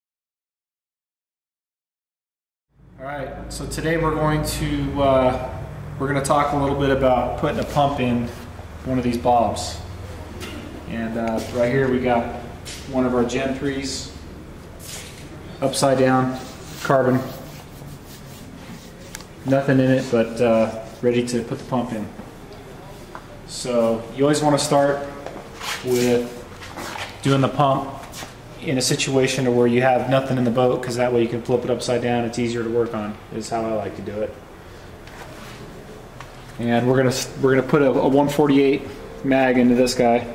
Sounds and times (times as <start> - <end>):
Speech: 3.0 - 10.0, 10.8 - 14.2, 15.6 - 17.6, 19.4 - 26.5, 27.2 - 34.4, 36.6 - 40.3.